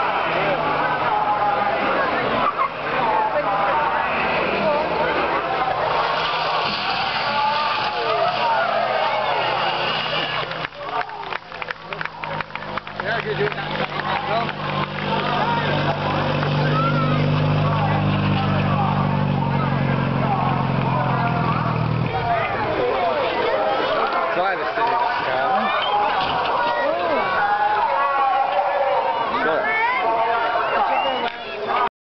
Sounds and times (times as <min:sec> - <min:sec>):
Speech: 0:00.0 - 0:06.2, 0:06.8 - 0:31.9.